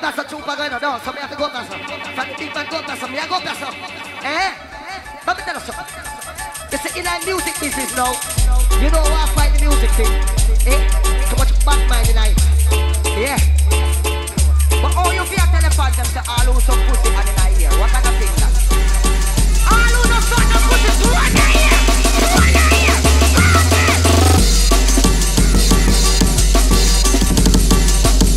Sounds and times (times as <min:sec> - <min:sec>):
Electronic music: 0:00.0 - 0:28.3.